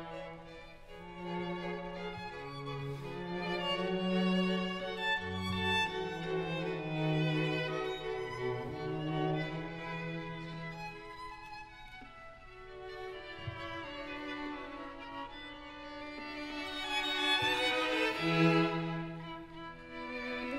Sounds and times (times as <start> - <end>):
Violin, fiddle: 0.0 - 20.5.